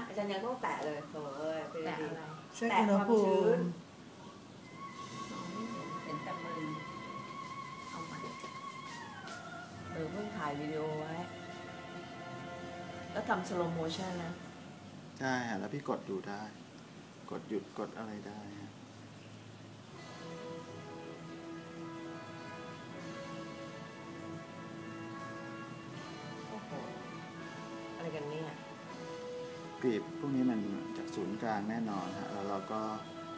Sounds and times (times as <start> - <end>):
Music: 4.6 - 15.0, 19.9 - 33.3.